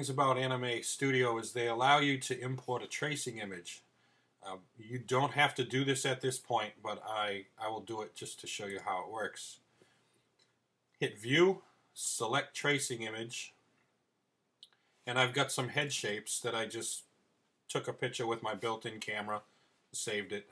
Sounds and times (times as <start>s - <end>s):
Speech: 0.0s - 9.6s, 11.0s - 13.6s, 15.1s - 17.1s, 17.7s - 20.5s.